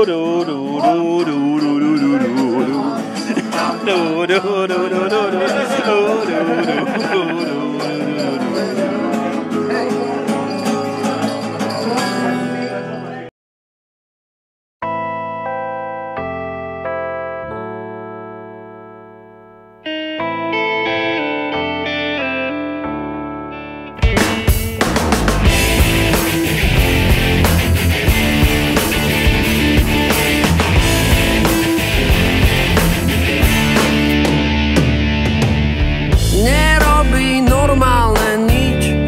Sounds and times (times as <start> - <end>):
Music: 0.0 - 13.3, 14.8 - 39.0
Effects unit: 14.8 - 39.0.